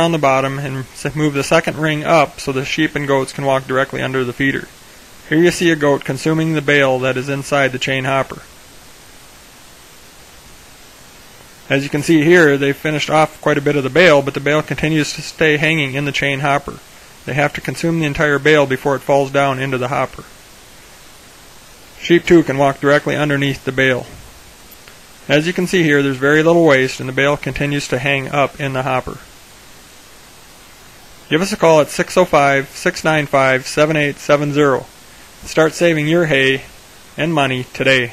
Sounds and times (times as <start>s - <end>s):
Speech: 0.0s - 8.5s, 11.7s - 20.4s, 22.0s - 24.2s, 25.3s - 29.3s, 31.3s - 38.1s.